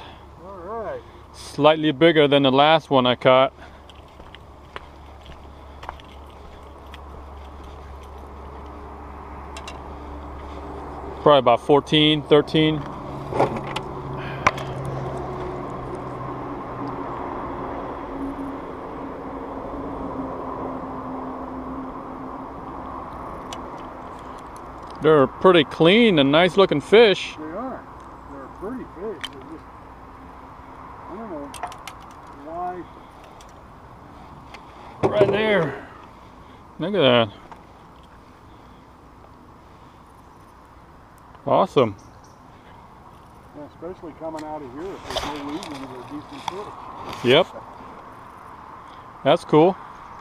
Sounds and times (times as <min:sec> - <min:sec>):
Outside, rural or natural: 0:00.0 - 0:50.2.